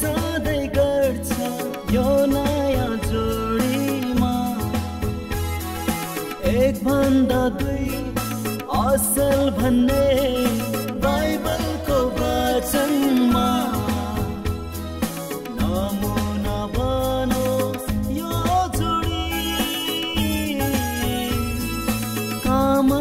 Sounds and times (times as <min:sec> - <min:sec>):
Music of Bollywood: 0:00.0 - 0:23.0
Wedding music: 0:00.0 - 0:23.0.